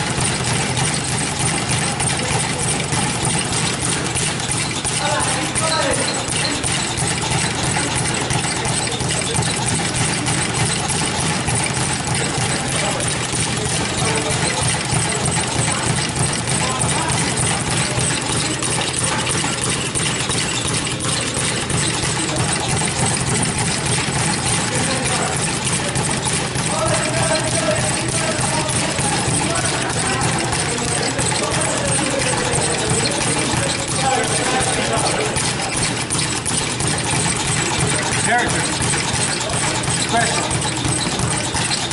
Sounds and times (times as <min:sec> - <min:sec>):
Inside, large room or hall: 0:00.0 - 0:41.9
Speech: 0:00.1 - 0:41.9.